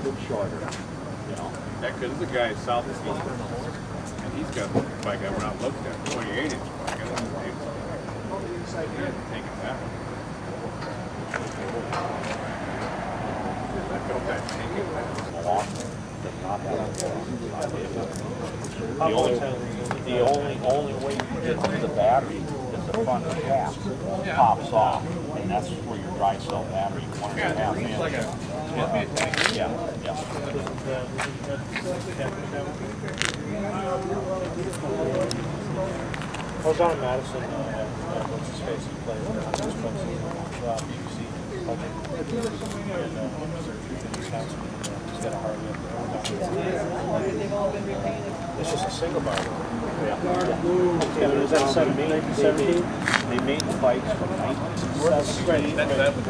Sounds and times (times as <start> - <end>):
Speech: 0.0 - 56.3.